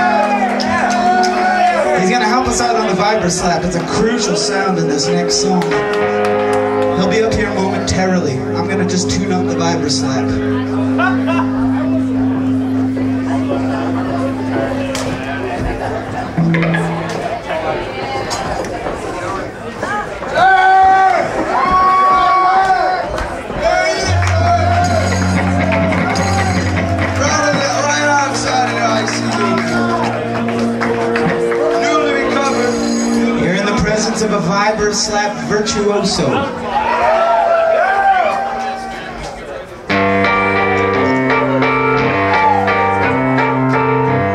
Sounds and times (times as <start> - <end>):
Music: 0.0 - 18.6, 23.2 - 44.3
Speech: 1.9 - 5.8, 7.0 - 11.3, 31.8 - 36.6.